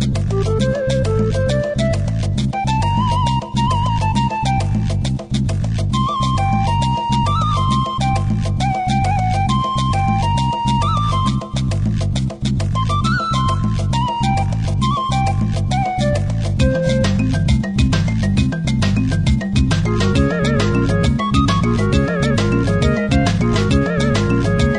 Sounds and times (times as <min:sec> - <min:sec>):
Happy music: 0:00.0 - 0:05.3, 0:05.9 - 0:12.0, 0:12.7 - 0:24.7.